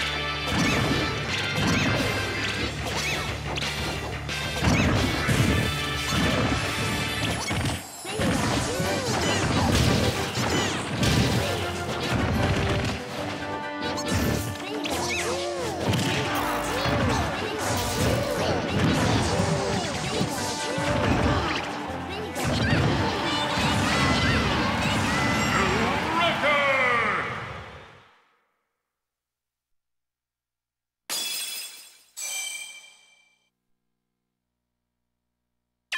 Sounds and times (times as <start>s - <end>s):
Music: 0.0s - 26.7s
Smash, crash: 0.4s - 26.1s.